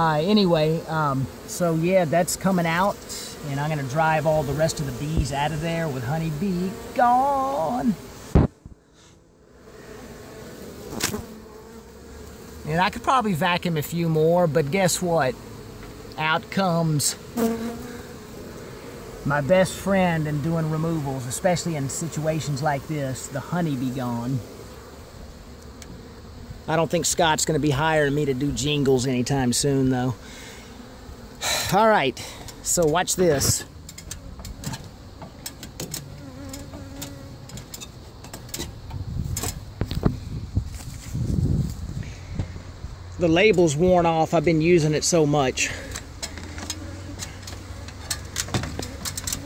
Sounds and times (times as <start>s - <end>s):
Bee, wasp, etc.: 0.0s - 49.4s
Fly, housefly: 0.0s - 49.4s.